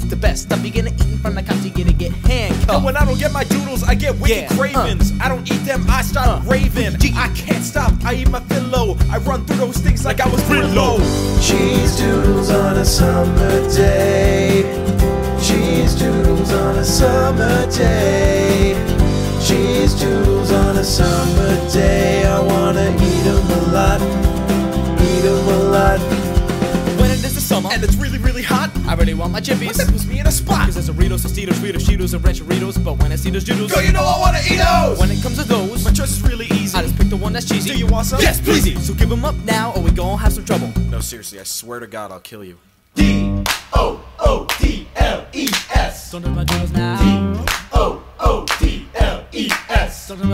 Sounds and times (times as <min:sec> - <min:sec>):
Speech: 0:00.0 - 0:11.0, 0:27.0 - 0:47.2, 0:48.6 - 0:50.3
Music: 0:00.0 - 0:41.2, 0:43.0 - 0:43.6, 0:46.0 - 0:47.8, 0:50.1 - 0:50.3.